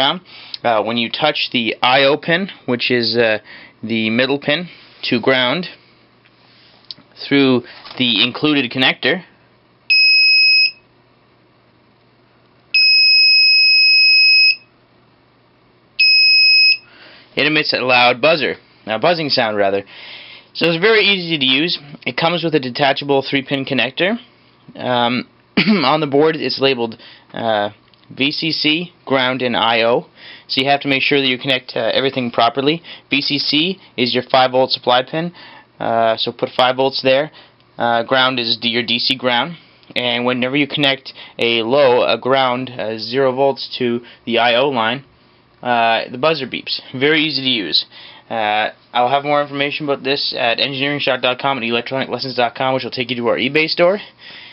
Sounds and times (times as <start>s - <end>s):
Speech: 0.0s - 5.8s, 7.2s - 9.3s, 17.4s - 19.9s, 20.6s - 54.1s
Buzzer: 9.9s - 10.9s, 12.8s - 14.7s, 16.0s - 16.9s
Smoke detector, smoke alarm: 9.9s - 10.9s, 12.8s - 14.7s, 16.0s - 16.9s.